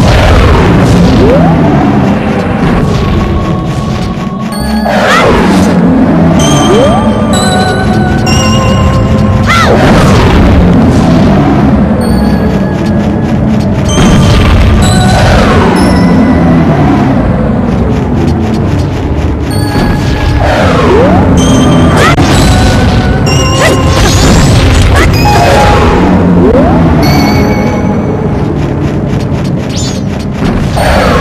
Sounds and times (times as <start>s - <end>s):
Music: 0.0s - 31.2s.